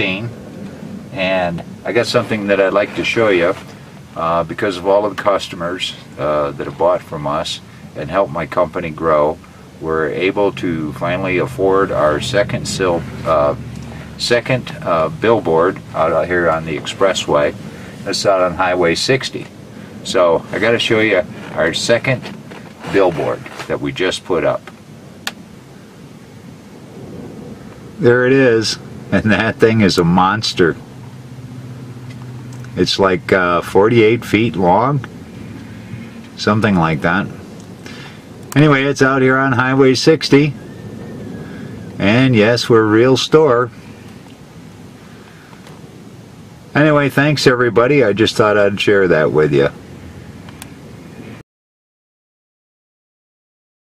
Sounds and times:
Speech: 0:00.0 - 0:00.4, 0:01.1 - 0:24.7, 0:28.0 - 0:30.8, 0:32.7 - 0:35.1, 0:36.4 - 0:37.4, 0:38.6 - 0:40.6, 0:42.0 - 0:43.8, 0:46.7 - 0:49.8.

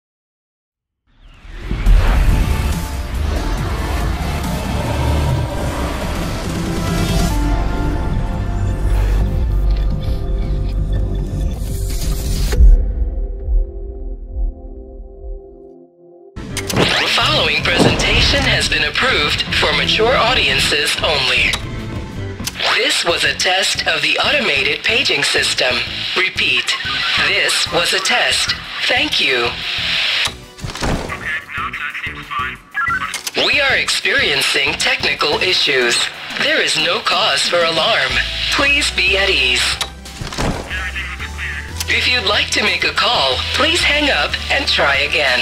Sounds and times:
Music: 0:01.1 - 0:45.4.

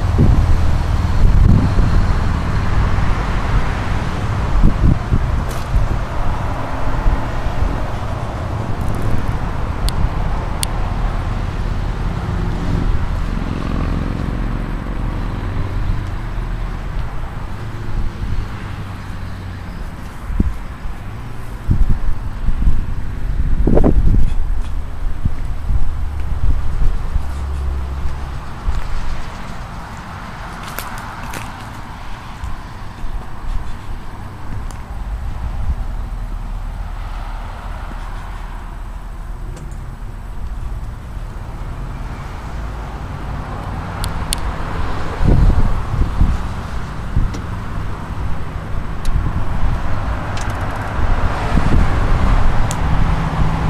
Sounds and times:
Vehicle: 0:00.0 - 0:53.6.

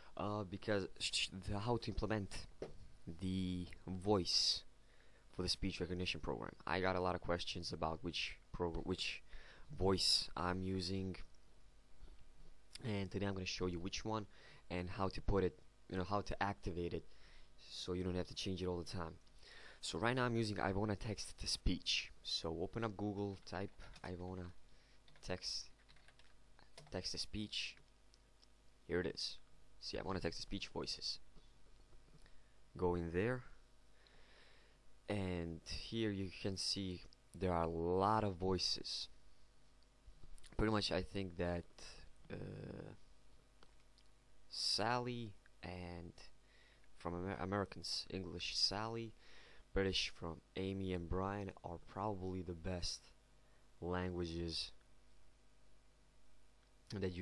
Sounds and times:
Speech: 0:00.2 - 0:04.7, 0:05.3 - 0:11.3, 0:12.8 - 0:19.2, 0:19.8 - 0:24.6, 0:25.2 - 0:25.8, 0:26.8 - 0:27.8, 0:28.9 - 0:31.3, 0:32.8 - 0:33.6, 0:35.1 - 0:39.2, 0:40.5 - 0:43.0, 0:44.5 - 0:46.4, 0:47.0 - 0:49.2, 0:49.8 - 0:53.2, 0:53.8 - 0:54.8, 0:56.9 - 0:57.2.

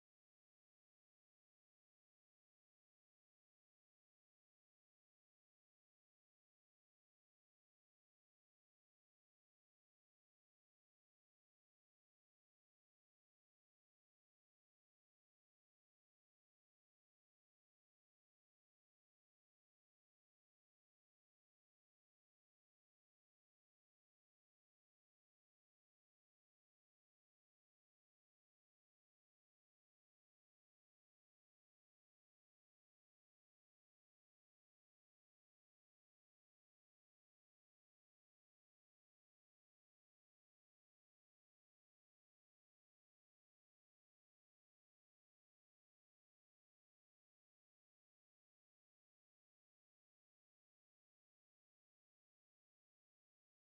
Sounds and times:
Silence: 0:00.0 - 0:53.6.

